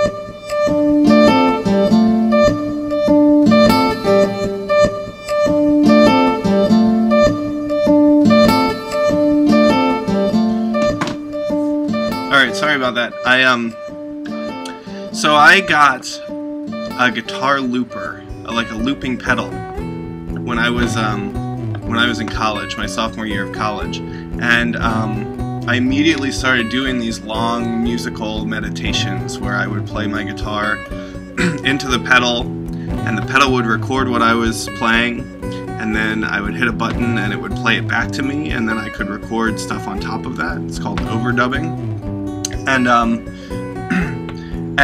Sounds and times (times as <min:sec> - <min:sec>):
Music: 0:00.0 - 0:44.8
Speech: 0:12.3 - 0:13.8, 0:15.2 - 0:16.2, 0:17.0 - 0:19.6, 0:20.4 - 0:30.8, 0:31.4 - 0:32.4, 0:33.0 - 0:35.2, 0:35.8 - 0:41.8, 0:42.6 - 0:43.2.